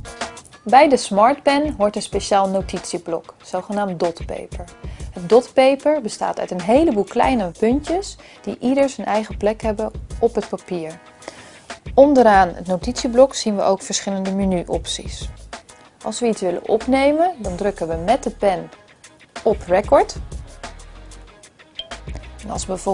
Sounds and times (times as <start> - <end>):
Music: 0.0 - 22.9
Speech: 0.7 - 11.0, 12.0 - 15.3, 16.0 - 18.8, 19.4 - 20.2, 22.4 - 22.9.